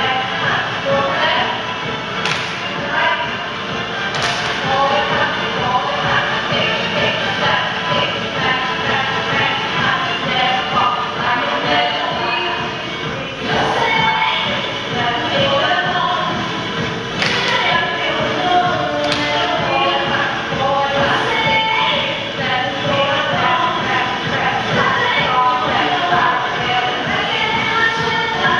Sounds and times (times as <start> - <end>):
Music: 0.0 - 28.6.